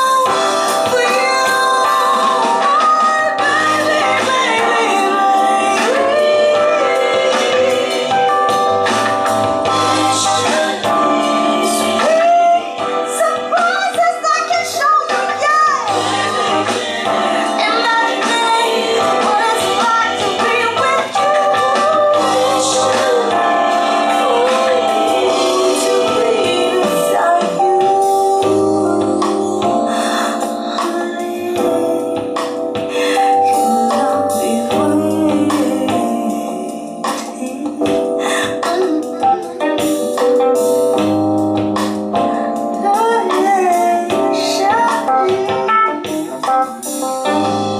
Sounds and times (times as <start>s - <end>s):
Music: 0.0s - 47.7s.